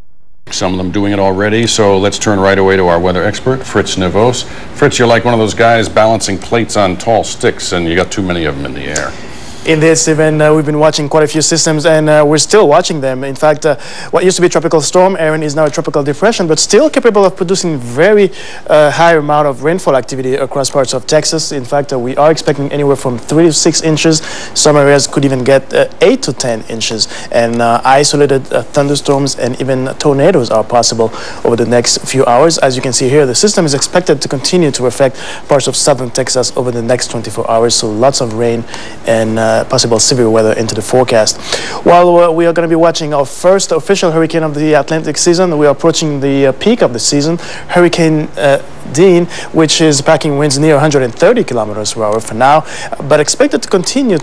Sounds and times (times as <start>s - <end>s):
Speech: 0.5s - 54.2s.